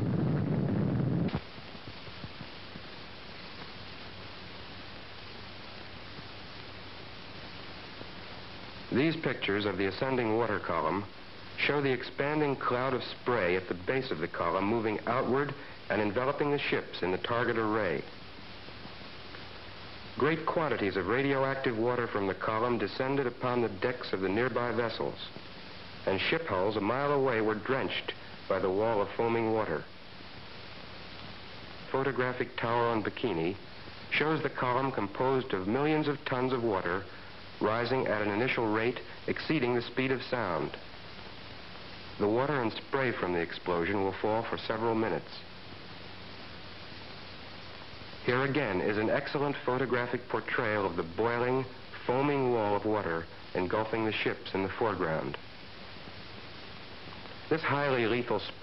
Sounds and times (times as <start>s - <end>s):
Speech: 8.9s - 18.1s, 20.2s - 25.4s, 26.0s - 29.9s, 31.9s - 40.8s, 42.2s - 45.5s, 48.2s - 55.4s, 57.5s - 58.6s.